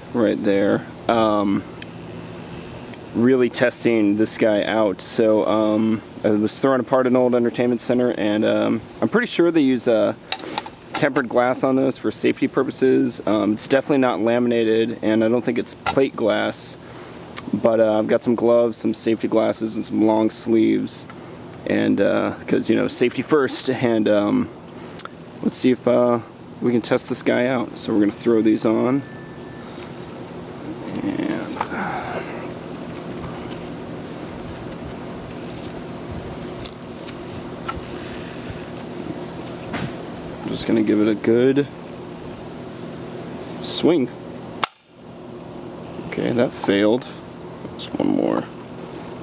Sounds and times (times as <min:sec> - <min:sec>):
Speech: 0:00.1 - 0:01.7, 0:03.2 - 0:10.2, 0:11.0 - 0:16.8, 0:17.4 - 0:24.5, 0:25.4 - 0:29.0, 0:30.9 - 0:31.7, 0:40.4 - 0:41.8, 0:43.6 - 0:44.2, 0:46.1 - 0:48.6.